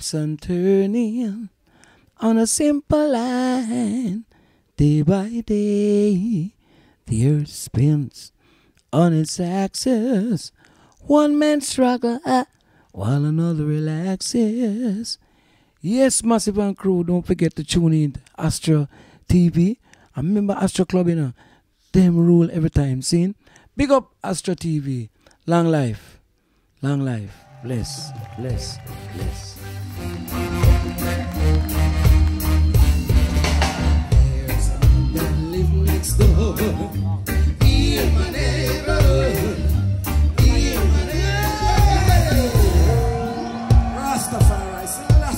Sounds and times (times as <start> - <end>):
Speech: 21.9 - 26.2, 26.8 - 29.6
Music: 28.0 - 45.3.